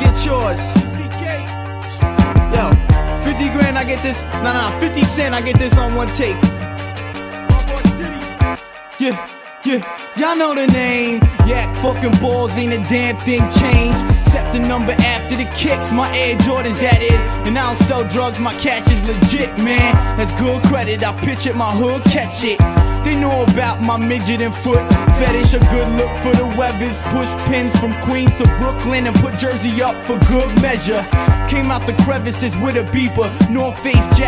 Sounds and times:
Music: 0:00.0 - 0:34.2.

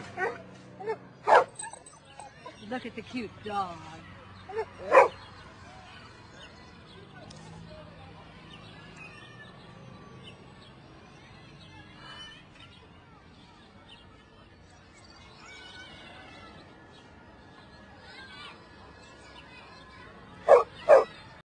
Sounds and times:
Bow-wow: 0:20.5 - 0:21.1.

